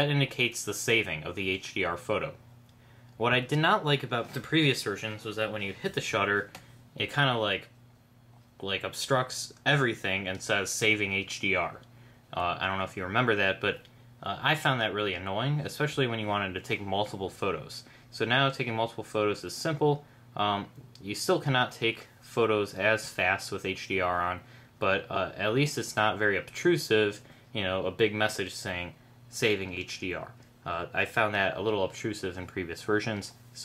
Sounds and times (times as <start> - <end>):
Speech: 0.0 - 2.4, 3.2 - 7.8, 8.6 - 33.6.